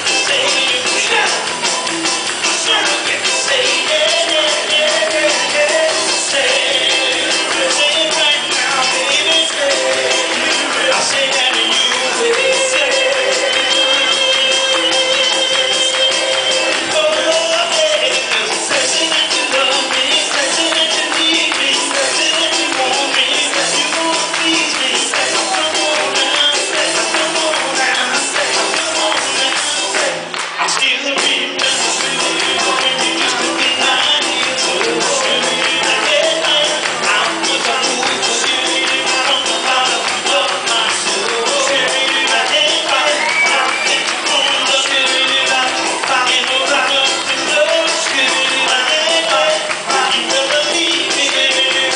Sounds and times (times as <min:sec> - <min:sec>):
Male singing: 0:00.0 - 0:01.5, 0:02.4 - 0:51.9
Music: 0:00.0 - 0:51.9.